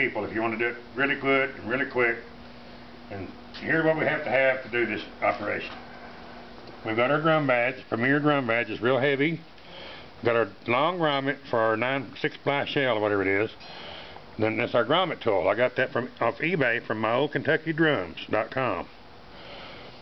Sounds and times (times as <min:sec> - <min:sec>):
Speech: 0:00.0 - 0:02.3, 0:03.1 - 0:05.8, 0:06.8 - 0:09.5, 0:10.2 - 0:13.6, 0:14.4 - 0:18.9.